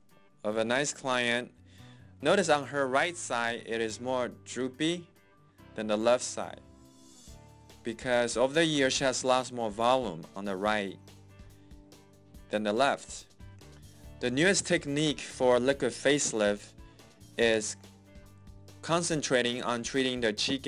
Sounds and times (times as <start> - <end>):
Music: 0.0 - 20.6
Speech: 0.4 - 1.5, 2.2 - 5.1, 5.8 - 6.6, 7.9 - 11.0, 12.5 - 13.2, 14.2 - 16.7, 17.4 - 17.8, 18.8 - 20.6.